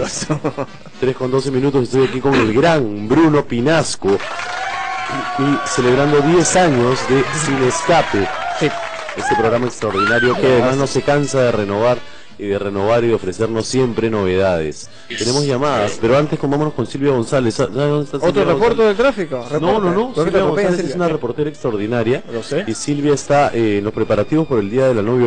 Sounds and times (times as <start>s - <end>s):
Music: 0.0s - 25.2s
Speech: 1.0s - 4.2s, 5.1s - 25.2s.